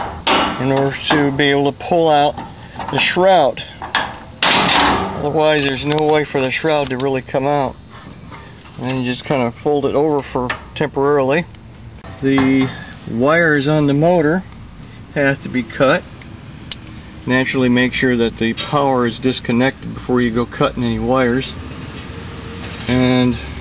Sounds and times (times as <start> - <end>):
Speech: 0.6 - 3.8, 5.2 - 7.8, 8.8 - 11.5, 12.2 - 14.4, 15.2 - 16.0, 17.3 - 21.6, 22.9 - 23.5.